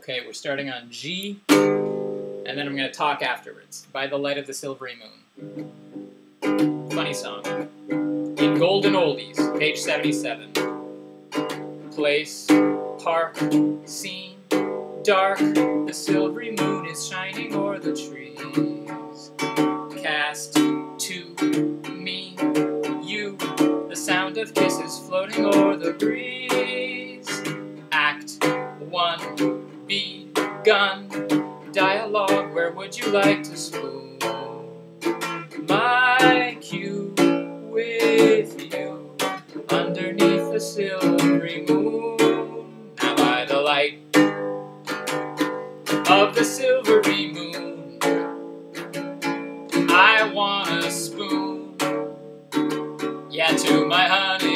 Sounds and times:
Music: 1.2 - 54.5
Male singing: 8.4 - 10.4, 13.0 - 14.4, 15.0 - 19.0, 20.0 - 29.3, 29.9 - 34.6, 35.7 - 44.0, 46.1 - 48.0, 49.9 - 51.9, 53.3 - 54.5.

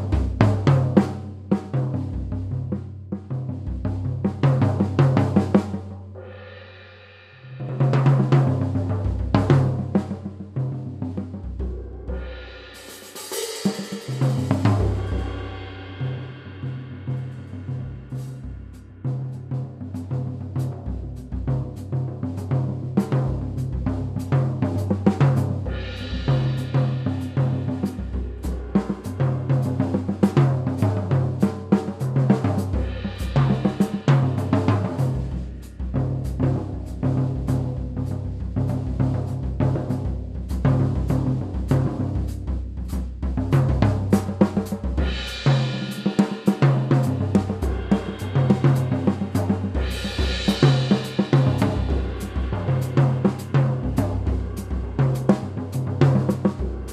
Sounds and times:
Bass drum: 0.0 - 6.1, 7.8 - 12.4, 14.1 - 56.9
Drum kit: 0.0 - 56.9
Drum roll: 0.0 - 56.9.

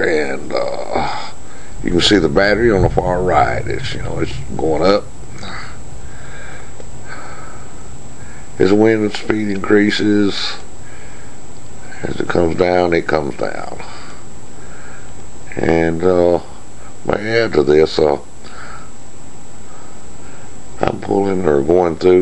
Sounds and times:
Speech: 0.0 - 5.8, 8.6 - 10.7, 11.9 - 14.2, 15.5 - 18.3, 20.8 - 22.2.

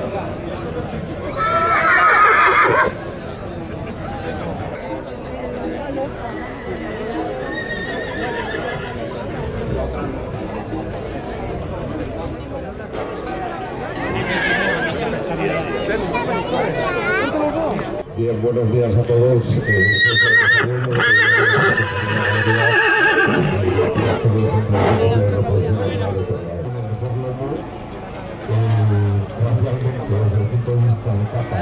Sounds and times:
Speech: 3.0 - 31.6.

